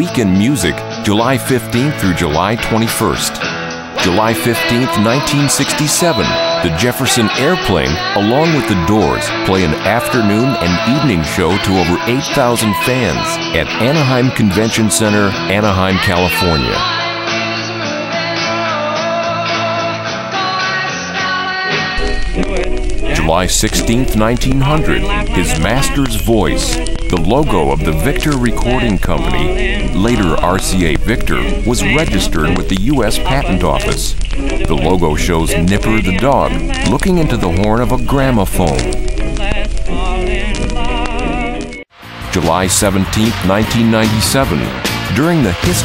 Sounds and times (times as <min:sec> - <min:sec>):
Speech: 0:00.0 - 0:03.4, 0:04.0 - 0:16.9, 0:23.1 - 0:39.0, 0:42.3 - 0:45.8
Music: 0:00.0 - 0:45.8.